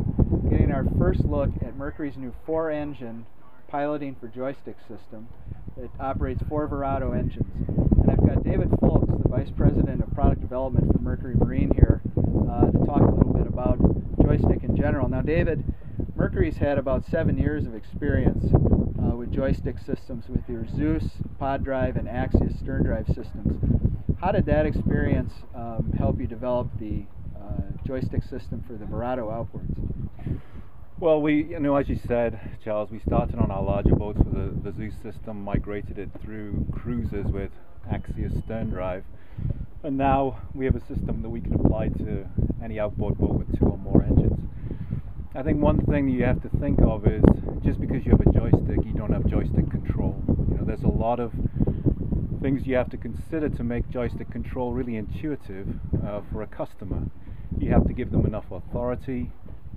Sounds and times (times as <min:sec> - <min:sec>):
Speech: 0:00.5 - 0:15.6, 0:16.2 - 0:23.6, 0:24.2 - 0:29.8, 0:31.0 - 0:39.1, 0:39.8 - 0:44.4, 0:45.4 - 0:51.4, 0:52.4 - 0:59.3.